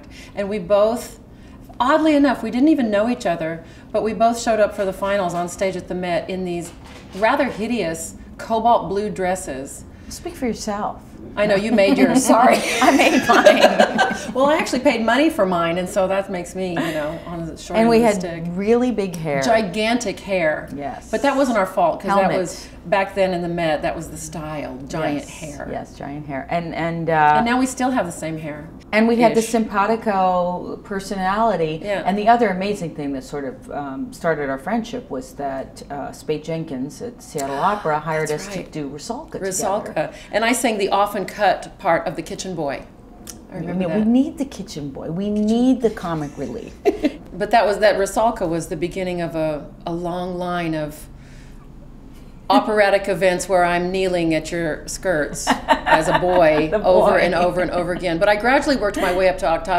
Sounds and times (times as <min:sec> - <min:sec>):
Inside, small room: 0:00.0 - 0:59.7
Speech: 0:14.3 - 0:42.8, 0:43.5 - 0:46.8, 0:52.5 - 0:59.7.